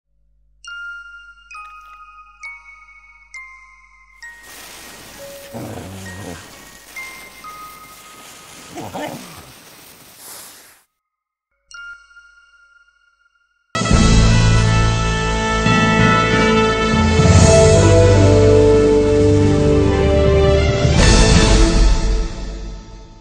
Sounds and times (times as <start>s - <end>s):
Glockenspiel: 0.6s - 5.2s, 11.6s - 13.7s.